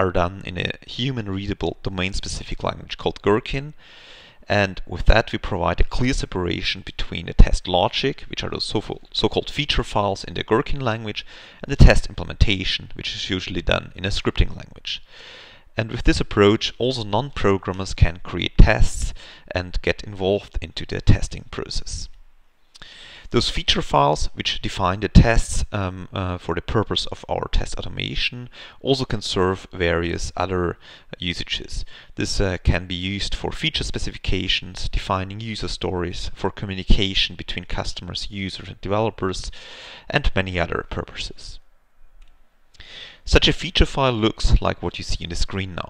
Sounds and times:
Speech: 0.0s - 3.8s, 4.5s - 15.1s, 15.8s - 22.2s, 23.3s - 41.6s, 43.3s - 45.9s.

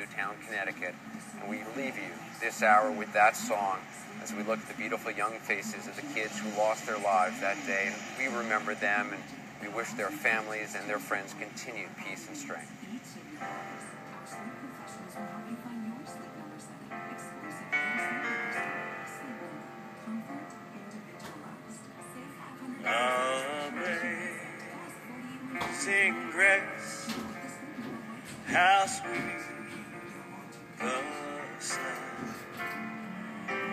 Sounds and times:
Speech: 0.0s - 32.4s
Music: 0.0s - 33.7s
Male singing: 22.6s - 32.7s.

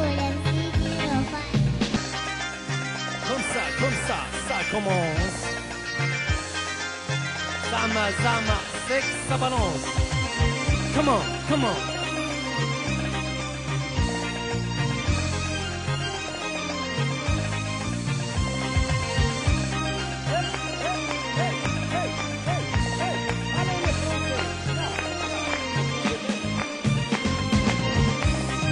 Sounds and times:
Independent music: 0.0s - 28.7s.

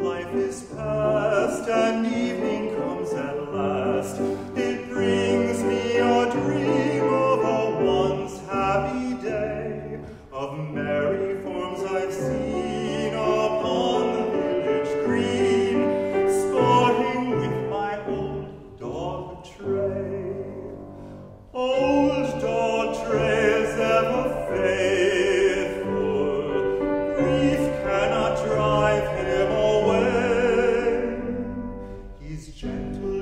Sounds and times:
Music: 0.0s - 33.2s.

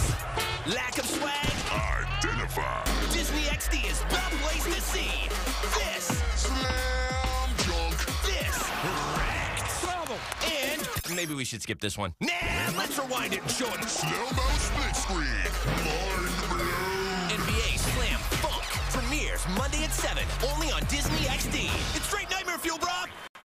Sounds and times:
Music: 0.0s - 11.4s, 12.4s - 23.3s
Speech: 0.7s - 23.2s.

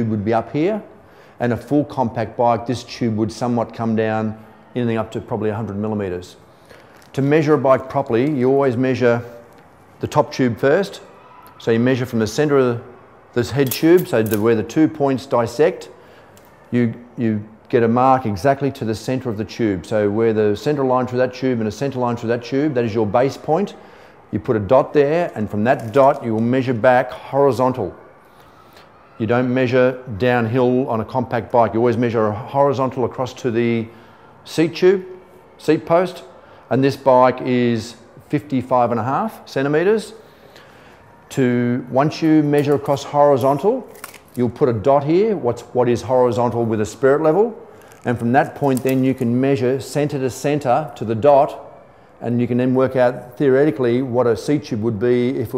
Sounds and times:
Speech: 0.0s - 6.4s, 7.1s - 9.4s, 10.0s - 16.0s, 16.7s - 28.0s, 29.2s - 33.9s, 34.5s - 40.2s, 41.3s - 51.6s, 52.2s - 55.5s.

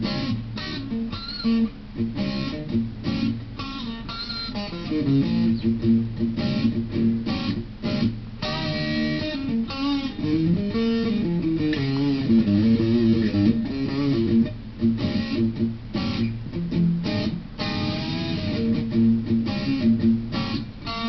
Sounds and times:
Blues: 0.0s - 21.0s
Electric guitar: 0.0s - 21.0s
Tapping (guitar technique): 0.0s - 21.0s.

